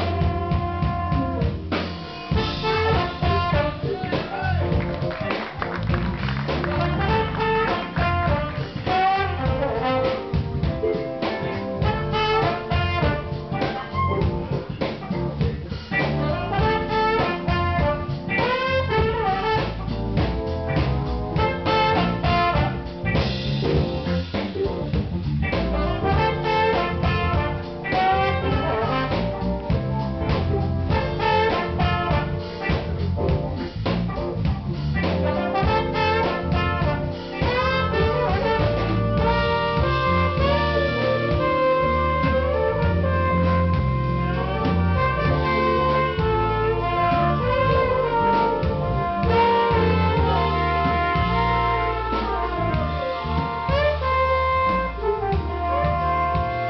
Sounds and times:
Jazz: 0.0 - 56.6.

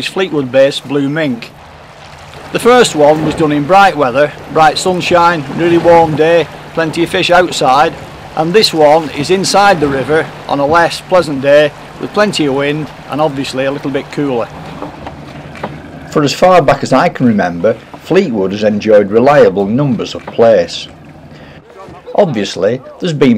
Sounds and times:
Sailboat, sailing ship: 0.0 - 23.3.

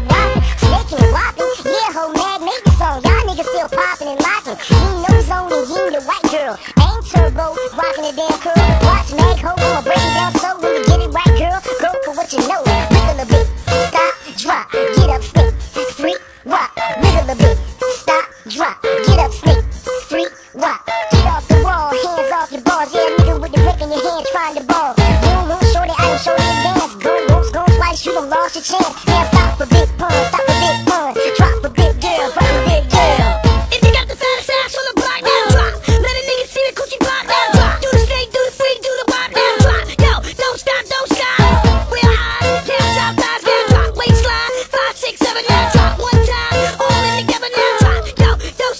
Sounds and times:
Hip hop music: 0.0 - 48.7
Pop music: 0.0 - 48.7.

